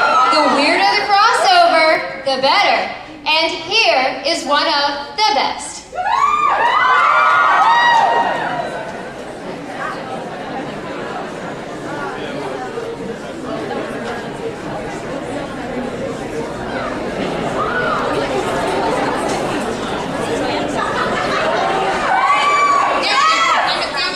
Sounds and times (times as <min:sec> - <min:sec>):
Chatter: 0:00.0 - 0:24.1
Inside, large room or hall: 0:00.0 - 0:24.1.